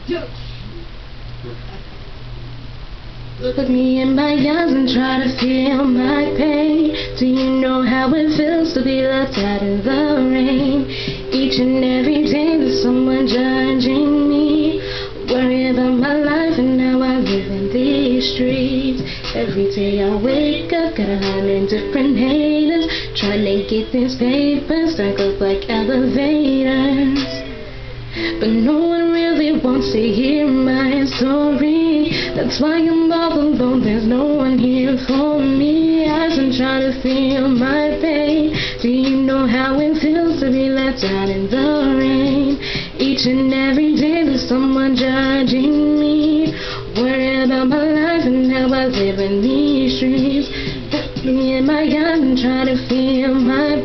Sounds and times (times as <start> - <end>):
Music: 0.0 - 53.8
Female singing: 3.4 - 27.6, 28.3 - 53.8.